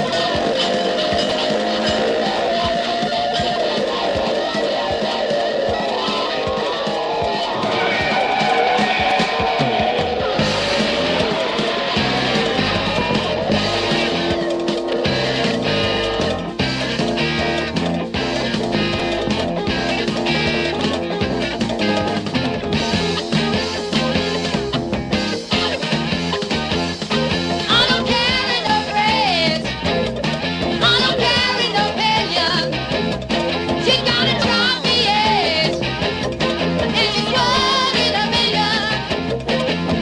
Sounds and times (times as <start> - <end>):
Cacophony: 0.0 - 40.0
Music: 0.0 - 40.0.